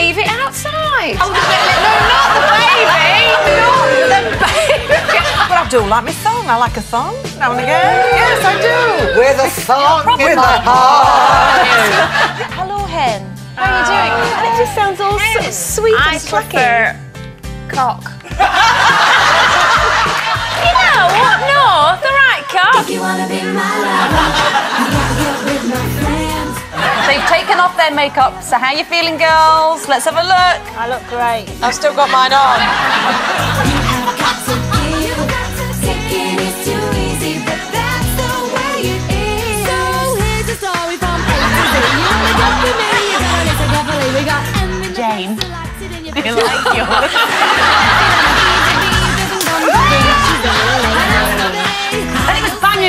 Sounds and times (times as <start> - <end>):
Female speech, woman speaking: 0.0 - 3.4, 5.1 - 11.5, 12.6 - 17.0, 17.7 - 18.1, 20.6 - 22.8, 27.1 - 32.7, 43.8 - 47.1, 49.4 - 52.8
Pop music: 0.0 - 52.8.